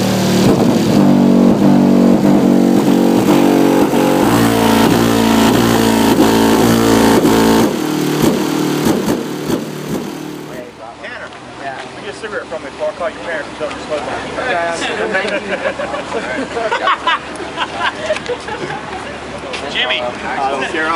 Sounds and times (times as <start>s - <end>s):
Car: 0.0s - 20.9s.